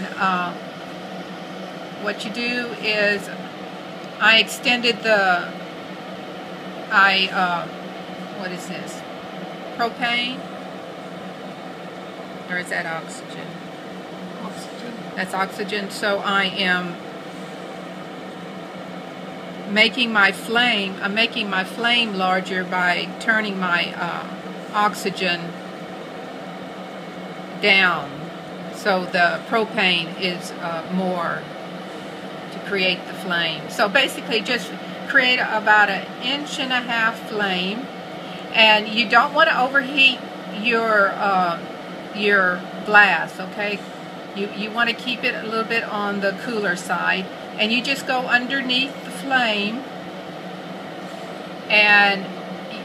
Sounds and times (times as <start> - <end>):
Speech: 0.0 - 0.6, 2.0 - 3.4, 4.2 - 5.6, 6.9 - 7.7, 8.4 - 9.0, 9.8 - 10.4, 12.5 - 13.6, 14.4 - 17.0, 19.7 - 25.6, 27.6 - 31.5, 32.6 - 37.9, 38.5 - 43.8, 44.4 - 49.8, 51.7 - 52.8.